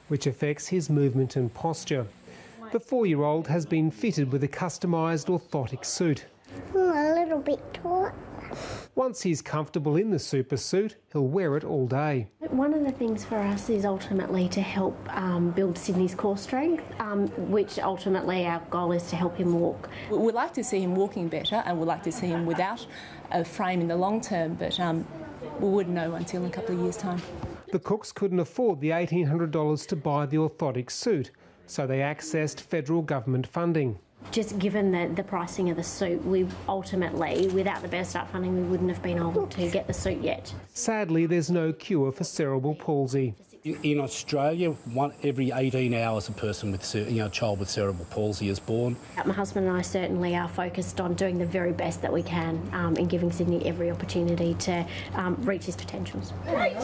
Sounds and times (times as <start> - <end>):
Female speech, woman speaking: 2.6 - 5.2, 12.4 - 27.4, 34.3 - 40.8, 49.2 - 56.8
Child speech, kid speaking: 6.6 - 8.6, 12.4 - 19.7, 34.3 - 40.6, 49.2 - 56.8.